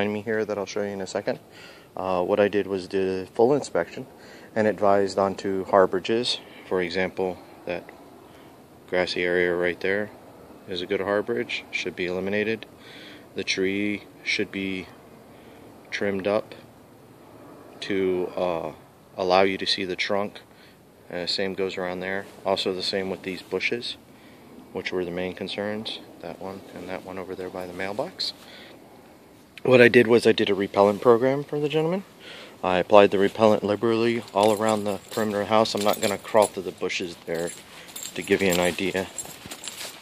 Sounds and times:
Speech: 0:00.0 - 0:01.4, 0:02.0 - 0:07.9, 0:08.9 - 0:12.7, 0:13.4 - 0:15.0, 0:15.9 - 0:16.7, 0:17.8 - 0:20.5, 0:21.1 - 0:24.0, 0:24.7 - 0:28.4, 0:29.6 - 0:39.2
Outside, urban or manmade: 0:00.0 - 0:40.0.

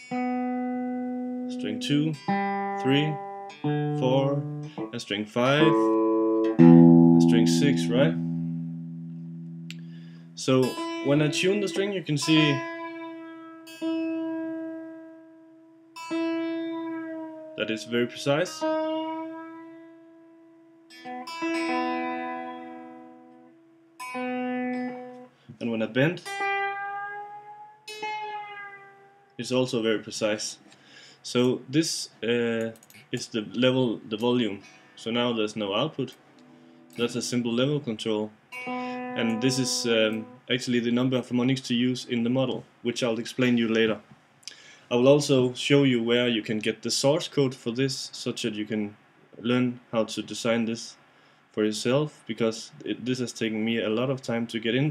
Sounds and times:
Speech: 0:01.5 - 0:02.2, 0:02.8 - 0:03.2, 0:03.9 - 0:05.9, 0:07.2 - 0:08.2, 0:10.4 - 0:12.6, 0:17.6 - 0:18.6, 0:25.5 - 0:26.3, 0:29.4 - 0:30.6, 0:31.2 - 0:36.2, 0:37.0 - 0:38.4, 0:39.2 - 0:44.1, 0:44.9 - 0:51.0, 0:51.6 - 0:54.9.

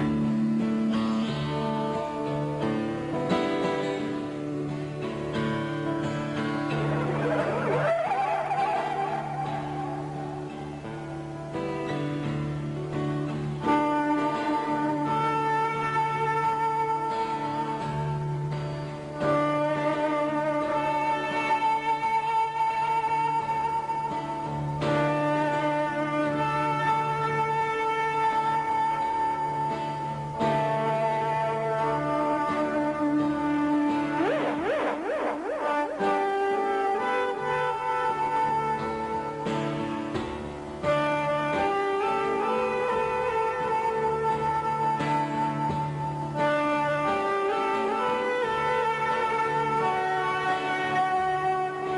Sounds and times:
Guitar: 0:00.0 - 0:51.9.

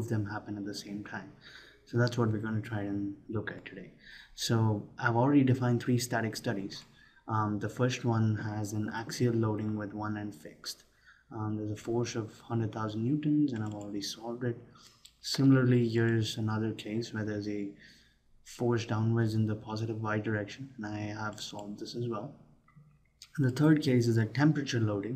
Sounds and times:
Speech: 0:00.0 - 0:17.8, 0:18.5 - 0:22.4, 0:23.2 - 0:25.1.

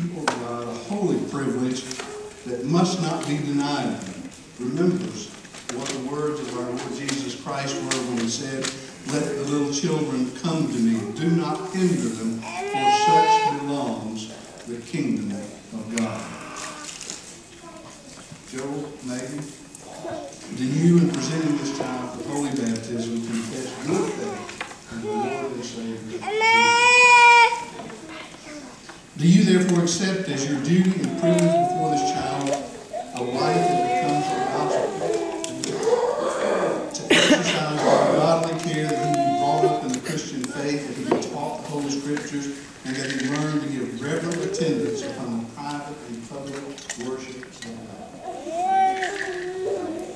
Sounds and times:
Male speech, man speaking: 0:00.0 - 0:16.4, 0:18.5 - 0:19.6, 0:20.5 - 0:27.2, 0:29.2 - 0:36.0, 0:36.9 - 0:48.1.

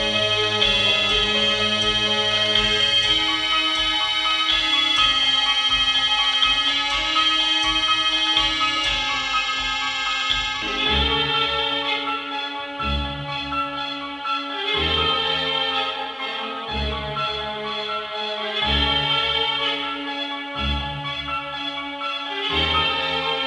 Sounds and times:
Inside, large room or hall: 0:00.0 - 0:23.4
Music: 0:00.0 - 0:23.4.

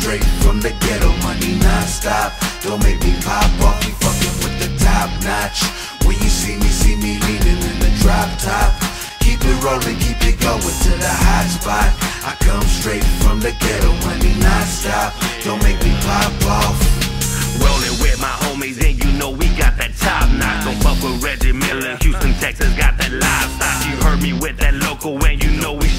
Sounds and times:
Music: 0:00.0 - 0:25.9.

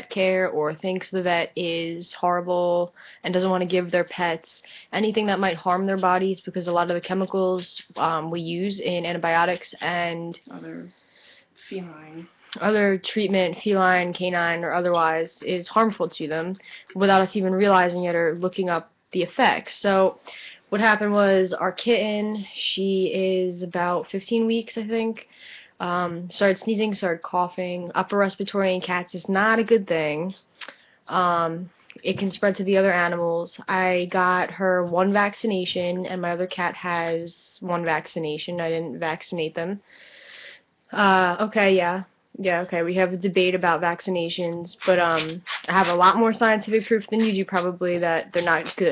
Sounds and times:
Speech: 0:00.0 - 0:10.9, 0:11.6 - 0:30.5, 0:31.1 - 0:48.9.

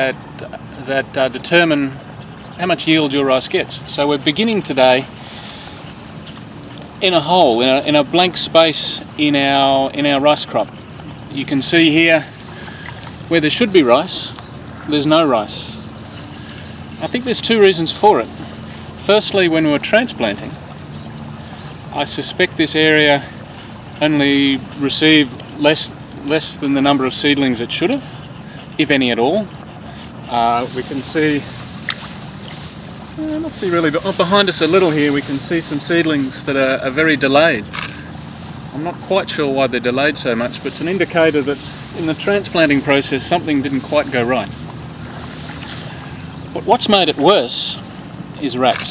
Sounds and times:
Speech: 0:00.0 - 0:02.0, 0:02.6 - 0:05.1, 0:07.0 - 0:10.7, 0:11.3 - 0:12.3, 0:13.3 - 0:15.9, 0:17.0 - 0:18.4, 0:19.0 - 0:20.6, 0:21.9 - 0:23.4, 0:24.0 - 0:28.1, 0:28.8 - 0:29.5, 0:30.3 - 0:31.5, 0:33.2 - 0:37.8, 0:38.7 - 0:44.6, 0:46.5 - 0:47.8, 0:48.4 - 0:48.9.

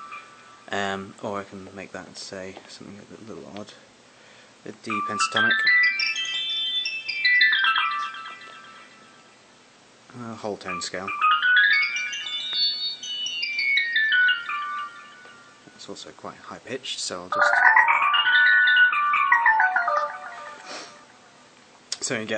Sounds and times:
Harp: 0:04.9 - 0:09.3, 0:10.1 - 0:15.9, 0:17.3 - 0:21.3.

